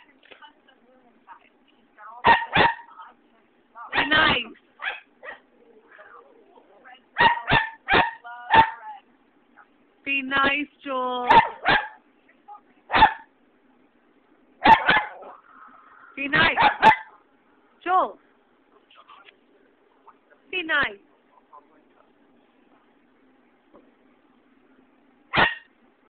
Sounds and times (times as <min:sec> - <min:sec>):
Domestic animals, pets: 0:25.4 - 0:25.7.